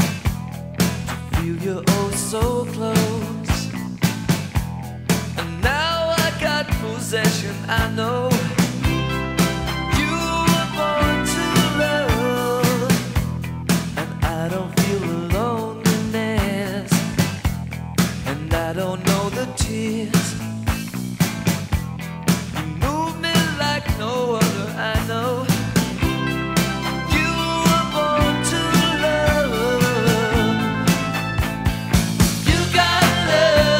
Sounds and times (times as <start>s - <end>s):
Music: 0.0s - 33.7s.